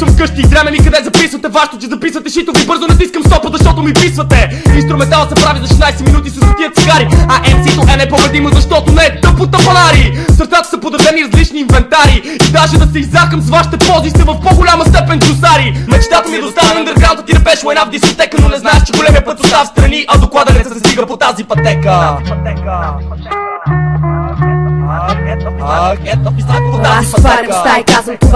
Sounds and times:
Music: 0.0 - 28.3.

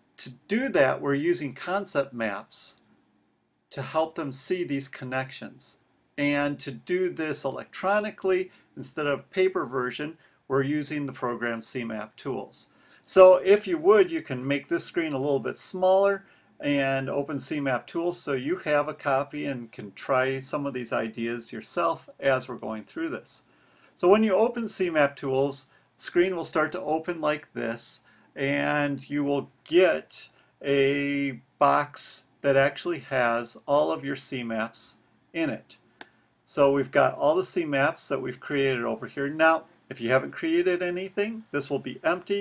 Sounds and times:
Speech: 0.2 - 2.8, 3.7 - 35.8, 36.5 - 42.4.

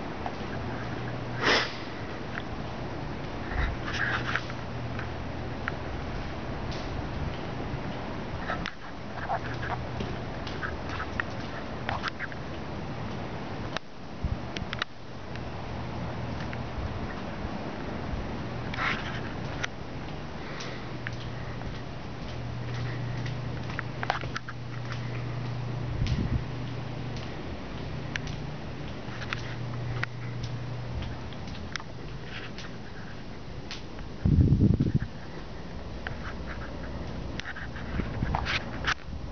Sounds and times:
Walk, footsteps: 18.8 - 33.8.

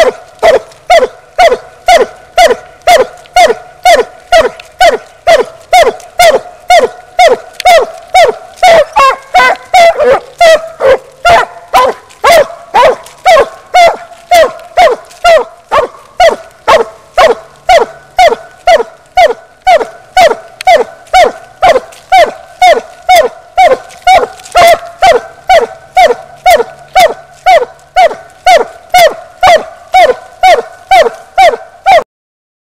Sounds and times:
Whimper (dog): 0.0 - 10.7, 11.3 - 32.0.

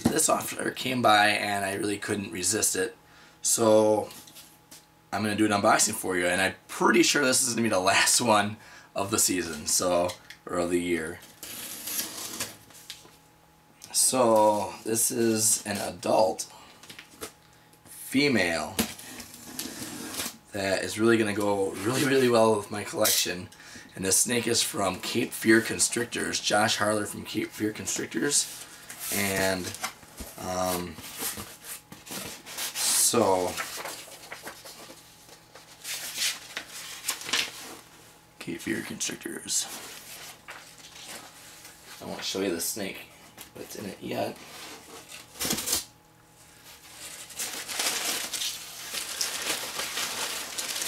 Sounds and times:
Speech: 0.0 - 4.2, 5.1 - 11.2, 13.9 - 16.5, 18.0 - 18.8, 20.5 - 28.5, 29.1 - 29.8, 30.4 - 31.0, 32.8 - 33.6, 38.4 - 39.8, 42.0 - 44.4
Inside, small room: 0.0 - 50.8.

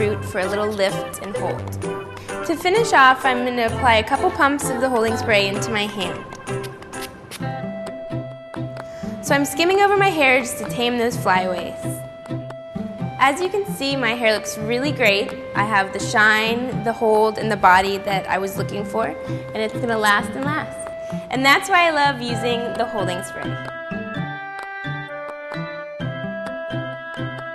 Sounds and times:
Music: 0.0 - 27.5
Speech: 15.8 - 20.7, 21.3 - 23.6.

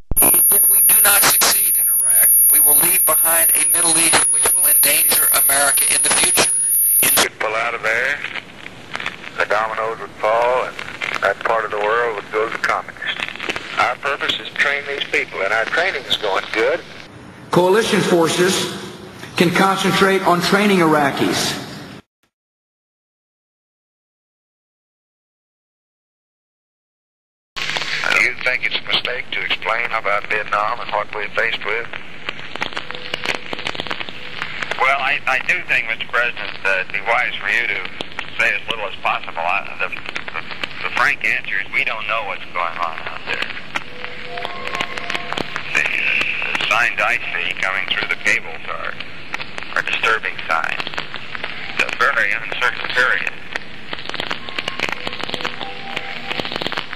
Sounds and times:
Male speech, man speaking: 0.2 - 8.3, 9.4 - 13.2, 13.8 - 16.8, 17.5 - 21.7, 28.0 - 31.9, 34.8 - 43.5, 45.7 - 49.0, 49.8 - 50.8, 51.8 - 53.4.

